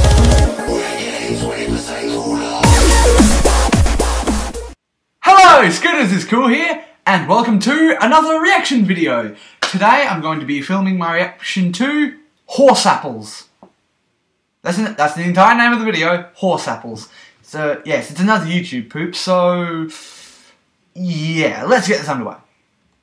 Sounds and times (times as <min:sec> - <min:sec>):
Speech: 0:05.2 - 0:13.6, 0:14.6 - 0:20.1, 0:21.0 - 0:22.5.